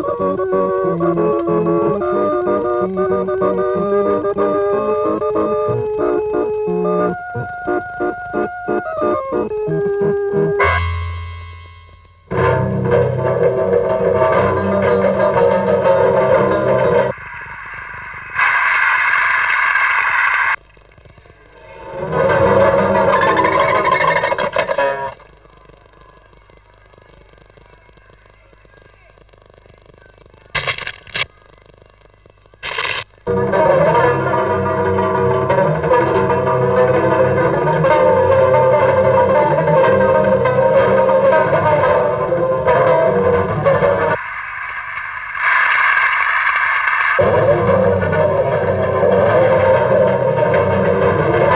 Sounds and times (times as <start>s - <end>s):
Music: 0.0s - 17.2s, 21.6s - 25.3s, 33.3s - 44.2s, 47.2s - 51.5s.